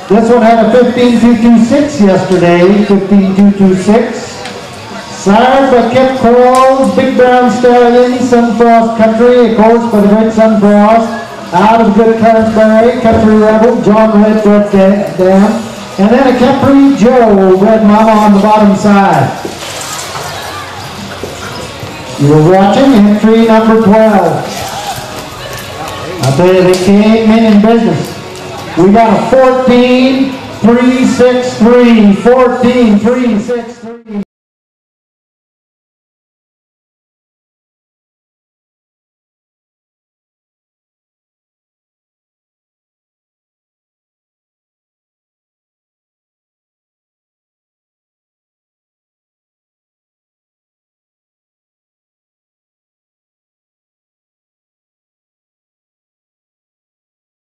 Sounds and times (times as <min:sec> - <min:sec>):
Speech: 0:00.0 - 0:19.4, 0:22.2 - 0:25.0, 0:25.8 - 0:34.3.